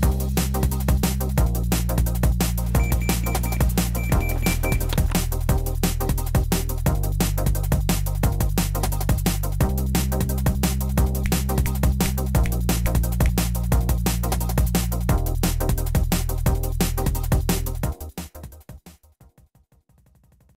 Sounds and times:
Music: 0:00.0 - 0:20.5.

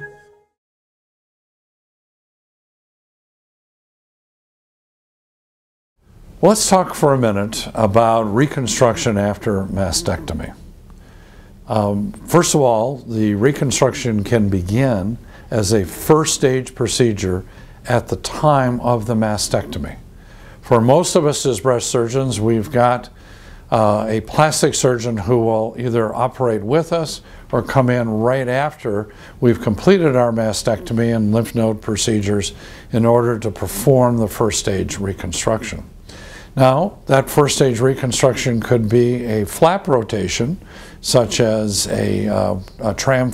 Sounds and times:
Speech: 0:06.4 - 0:10.6, 0:11.7 - 0:20.0, 0:20.6 - 0:35.9, 0:36.6 - 0:43.3.

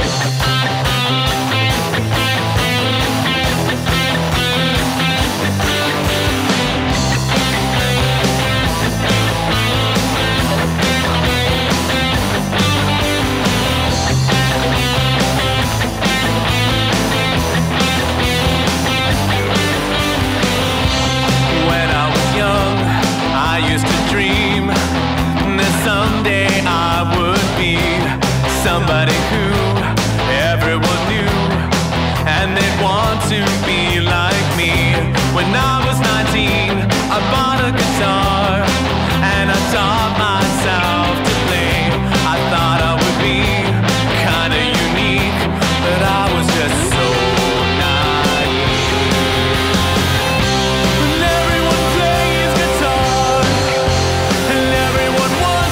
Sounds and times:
Guitar: 0:00.0 - 0:55.7.

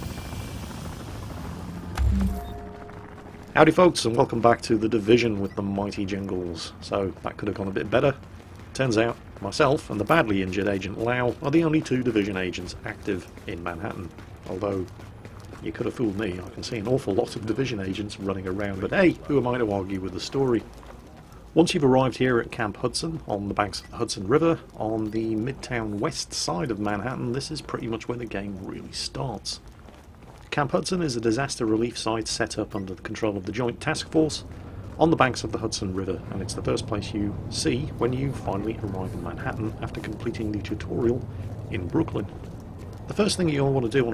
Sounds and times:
Speech: 0:03.6 - 0:08.2, 0:08.8 - 0:14.9, 0:15.6 - 0:20.7, 0:21.6 - 0:29.6, 0:30.5 - 0:42.3, 0:43.1 - 0:44.1.

